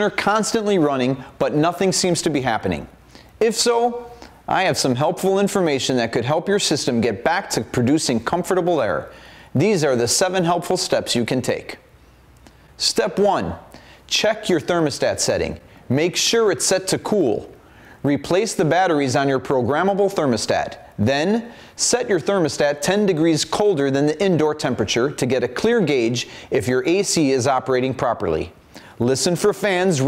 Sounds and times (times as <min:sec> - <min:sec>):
Speech: 0:00.0 - 0:11.9, 0:12.8 - 0:30.0.